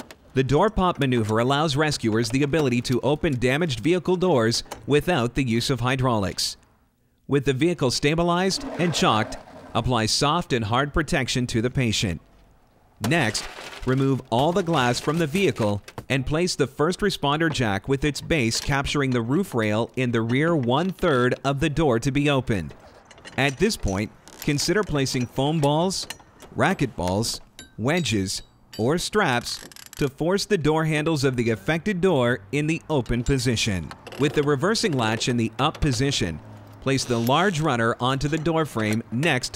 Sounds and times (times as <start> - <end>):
Speech: 0.4 - 6.6, 7.3 - 12.2, 13.0 - 22.8, 23.4 - 39.5.